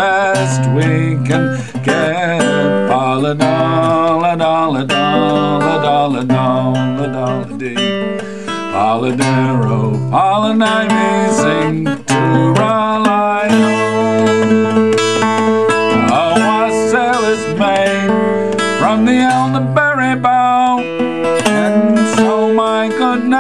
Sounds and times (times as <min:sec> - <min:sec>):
Singing: 0:00.0 - 0:08.0, 0:08.7 - 0:14.9, 0:15.9 - 0:18.2, 0:18.8 - 0:23.4
Guitar: 0:00.0 - 0:23.4.